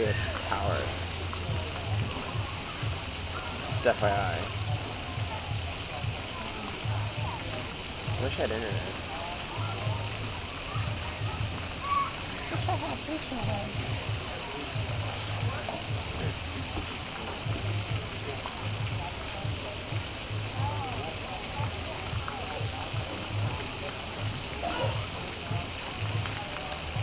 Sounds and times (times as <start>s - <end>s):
Speech: 0.0s - 27.0s
Waterfall: 0.0s - 27.0s.